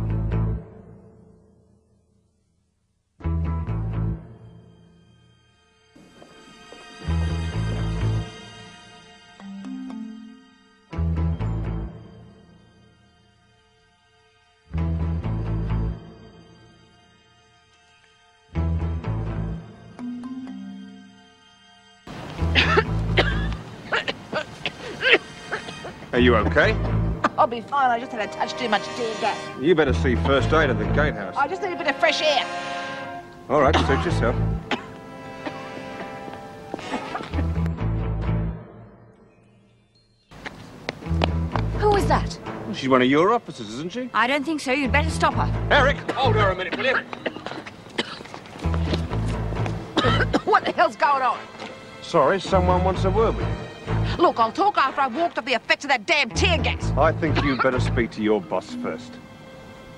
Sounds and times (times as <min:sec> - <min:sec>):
Music: 0:00.0 - 0:59.9.